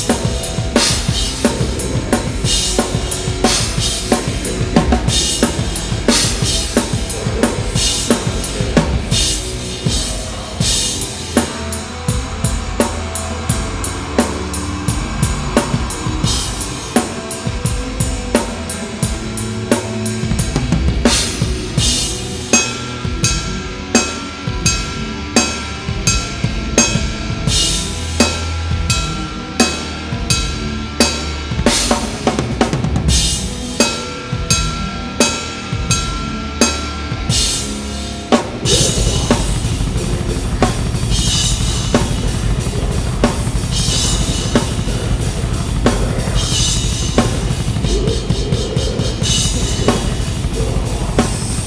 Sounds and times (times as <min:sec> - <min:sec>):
Drum roll: 0:00.0 - 0:22.3, 0:38.4 - 0:51.6
Drum kit: 0:00.0 - 0:51.6.